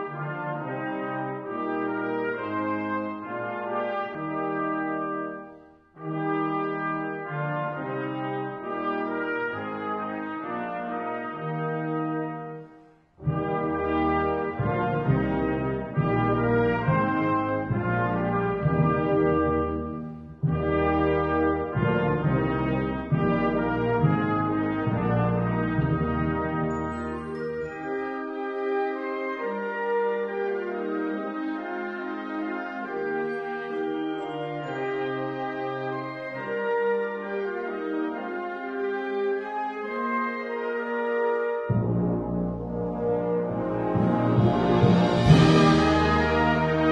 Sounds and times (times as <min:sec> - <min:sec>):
Music: 0:00.0 - 0:46.9.